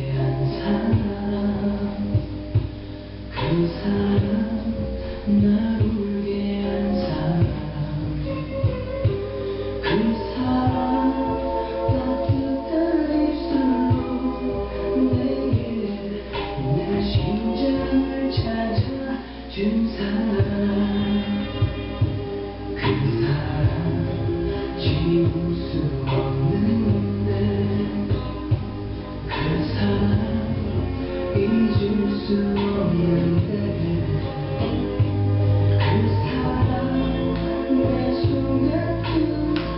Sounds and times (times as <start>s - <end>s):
Music: 0.0s - 39.7s.